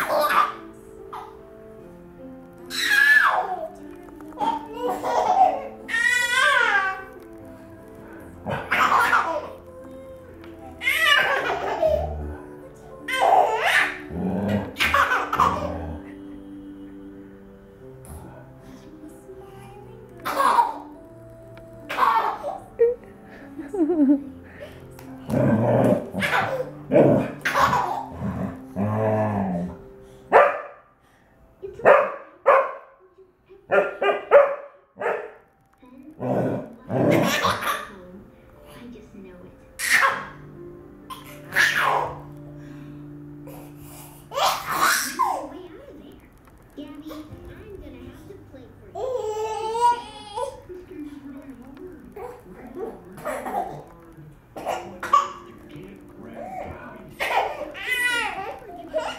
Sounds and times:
Speech: 35.8 - 40.0, 45.2 - 59.1.

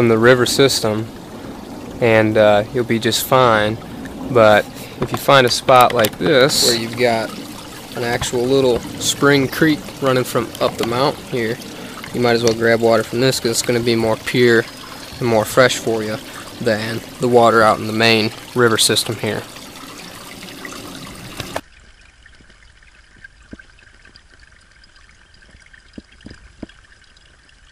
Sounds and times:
Speech: 0.0 - 1.1, 2.0 - 7.4, 8.0 - 19.5
Pour: 0.0 - 27.7.

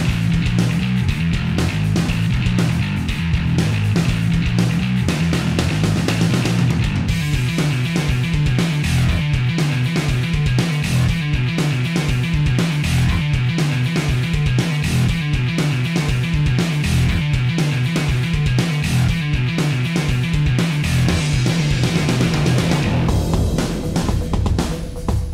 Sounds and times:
Music: 0.0 - 25.3.

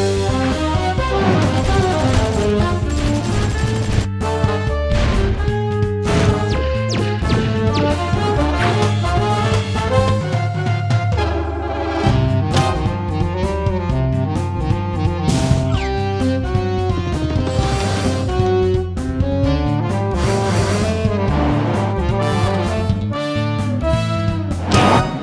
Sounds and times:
Music: 0.0 - 25.2.

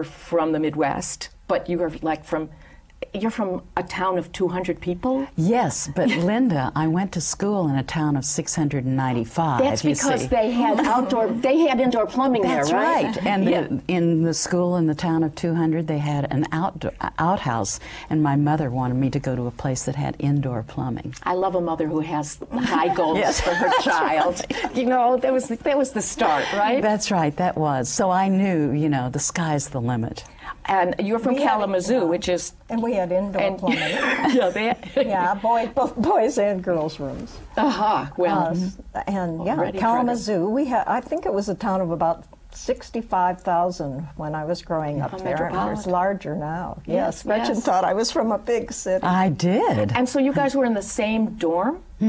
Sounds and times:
Female speech, woman speaking: 0.0 - 51.8.

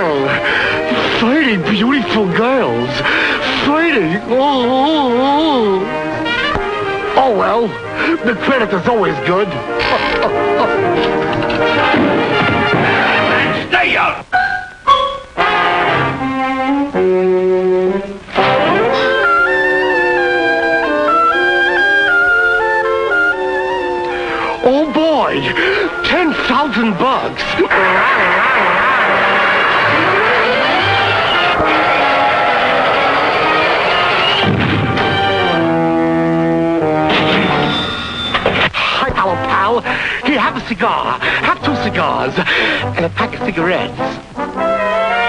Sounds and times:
Music: 0.0 - 45.2.

